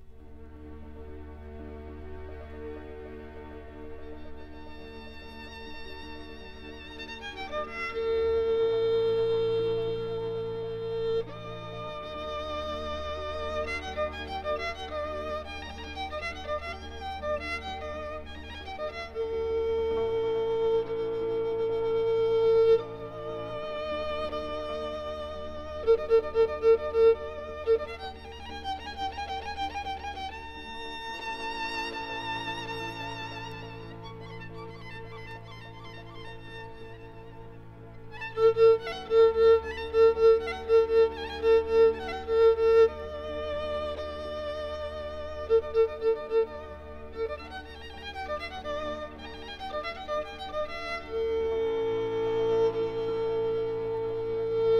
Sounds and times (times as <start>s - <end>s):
Music: 0.0s - 54.7s.